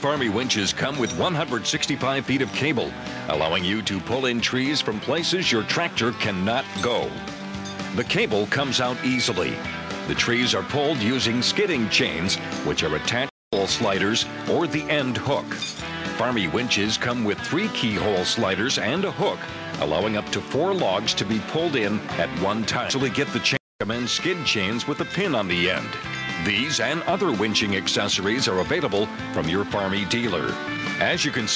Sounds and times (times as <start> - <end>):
Speech: 0.0 - 7.2, 7.9 - 15.6, 16.2 - 31.5
Music: 0.0 - 31.5.